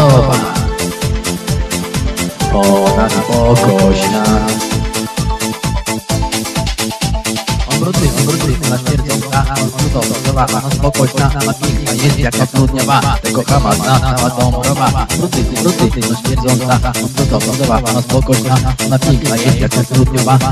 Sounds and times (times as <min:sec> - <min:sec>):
Speech: 0:00.0 - 0:00.7, 0:02.4 - 0:04.6, 0:07.7 - 0:20.5
Music: 0:00.0 - 0:20.5.